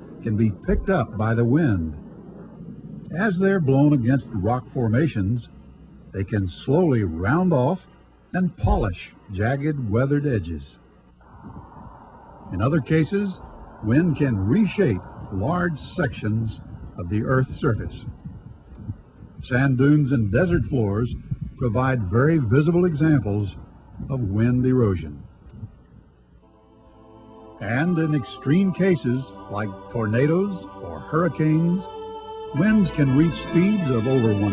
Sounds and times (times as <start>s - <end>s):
Speech: 0.2s - 2.0s, 3.1s - 5.5s, 6.2s - 10.8s, 12.5s - 18.1s, 19.4s - 25.3s, 27.6s - 31.8s, 32.6s - 34.5s
Music: 26.4s - 34.5s.